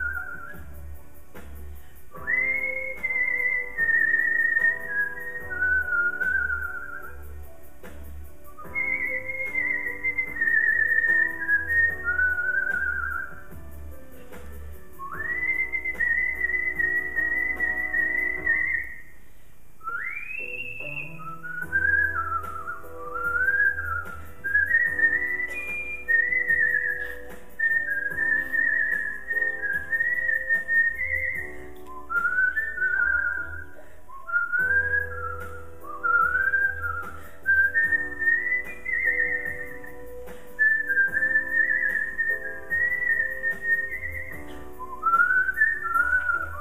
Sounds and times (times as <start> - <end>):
Whistling: 0.0 - 19.2, 19.8 - 46.6
Music: 0.0 - 46.6.